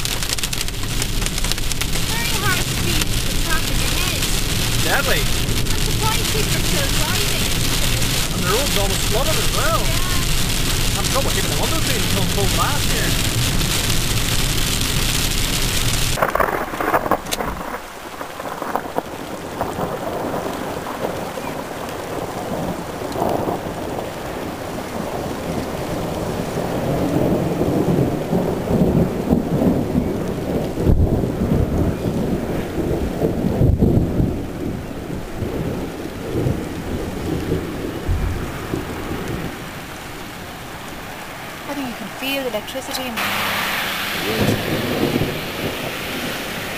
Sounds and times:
Thunder: 0.0s - 40.1s, 43.2s - 46.7s
Rain: 0.0s - 46.7s.

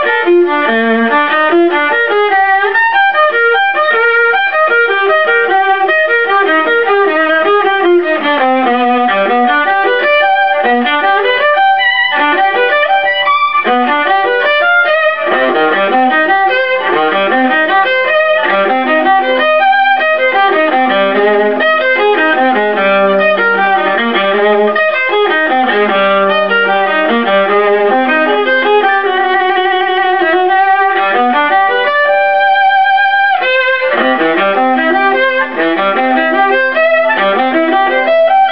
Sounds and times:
Violin, fiddle: 0.0s - 38.5s.

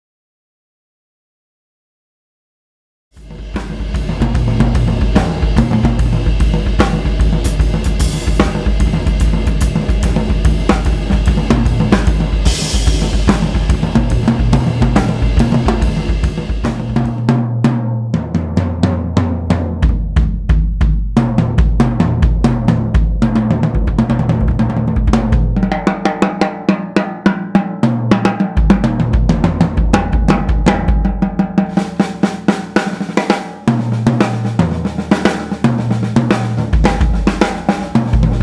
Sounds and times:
Drum kit: 3.1s - 38.4s
Bass drum: 3.2s - 26.1s, 28.0s - 38.4s
Drum roll: 3.2s - 38.4s.

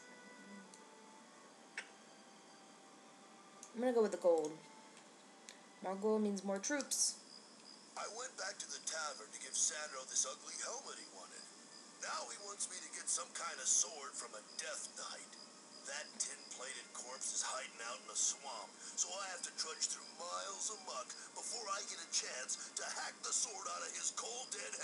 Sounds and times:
Speech: 3.8s - 4.6s, 5.8s - 7.2s, 8.0s - 24.8s.

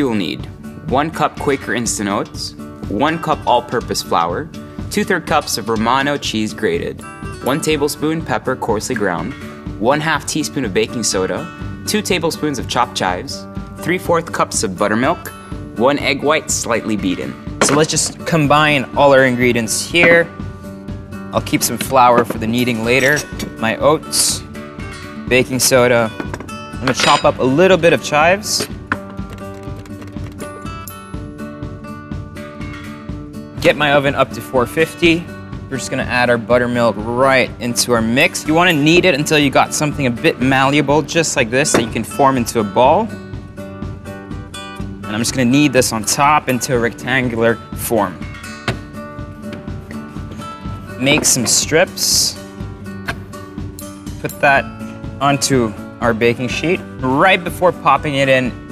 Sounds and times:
Speech: 0.0s - 20.3s, 21.4s - 24.4s, 25.3s - 26.1s, 26.8s - 28.7s, 33.6s - 43.1s, 45.1s - 48.2s, 51.0s - 52.4s, 54.2s - 58.6s
Music: 0.0s - 58.7s.

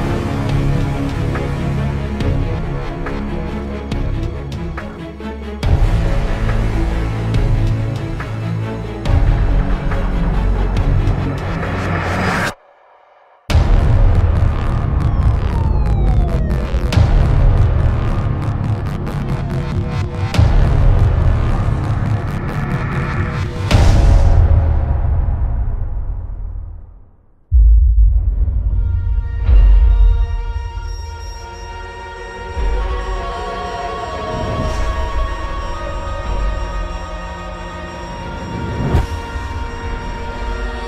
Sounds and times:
Music: 0.0s - 40.8s.

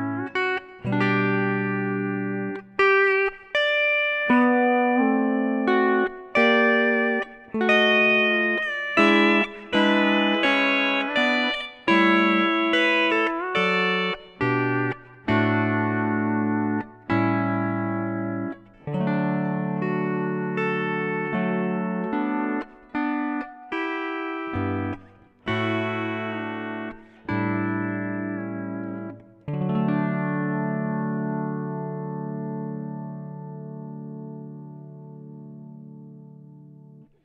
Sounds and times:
Plucked string instrument: 0.0s - 37.2s.

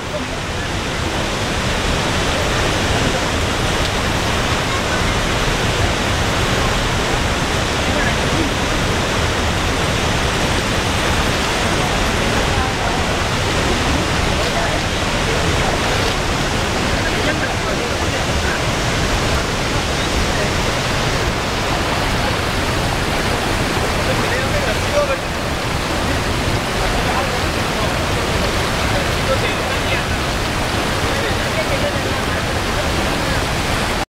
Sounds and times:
Speech: 0.0s - 1.6s, 2.2s - 9.2s, 11.4s - 21.0s, 21.8s - 34.0s
Stream: 0.0s - 34.1s
Waterfall: 0.0s - 34.1s.

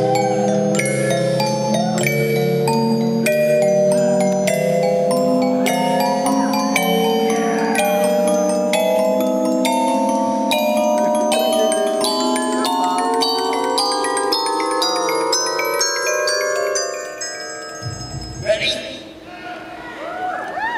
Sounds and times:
Music: 0.0s - 19.2s.

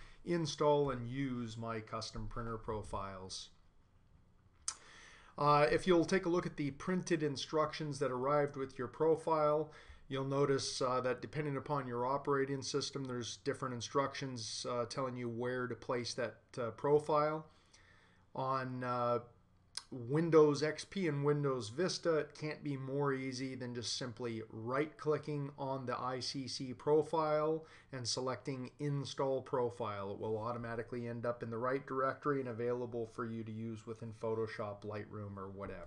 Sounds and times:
Speech: 0.3s - 3.6s, 5.4s - 17.5s, 18.4s - 35.8s.

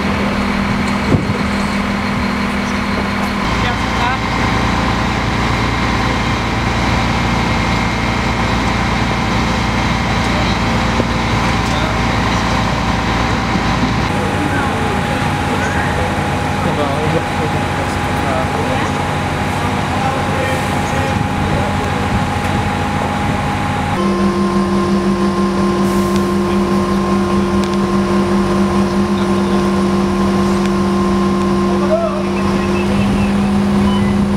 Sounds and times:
Speech: 3.5s - 4.4s, 14.1s - 23.4s, 28.1s - 30.7s, 31.7s - 33.5s.

